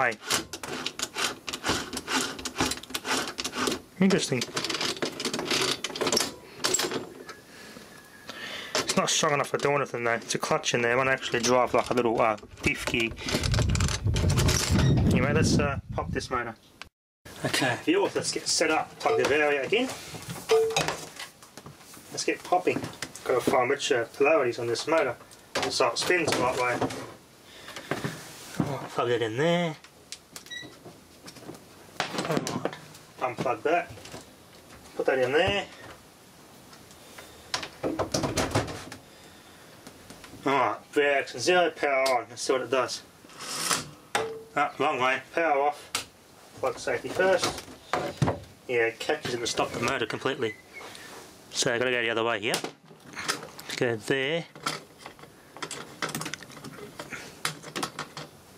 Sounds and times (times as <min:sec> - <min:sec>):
Speech: 0:00.0 - 0:00.2, 0:04.0 - 0:04.5, 0:08.9 - 0:13.2, 0:15.1 - 0:16.6, 0:17.4 - 0:20.0, 0:22.1 - 0:26.9, 0:28.6 - 0:29.8, 0:32.3 - 0:33.9, 0:35.0 - 0:35.8, 0:40.4 - 0:43.1, 0:44.6 - 0:45.9, 0:46.6 - 0:47.6, 0:48.7 - 0:50.6, 0:51.5 - 0:52.7, 0:53.7 - 0:54.6.